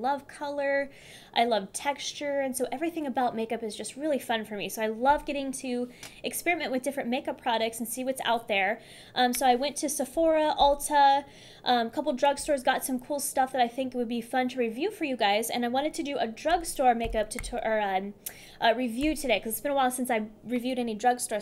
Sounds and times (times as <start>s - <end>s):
Speech: 0.0s - 21.4s.